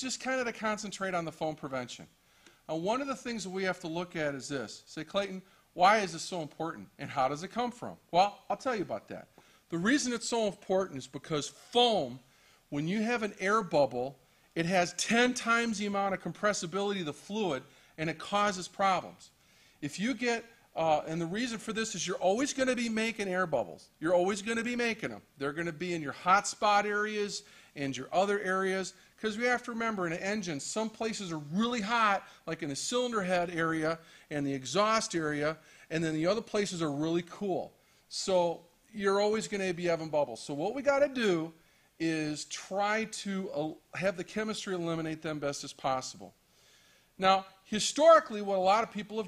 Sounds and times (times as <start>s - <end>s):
Speech: 0.0s - 46.4s, 47.2s - 49.2s.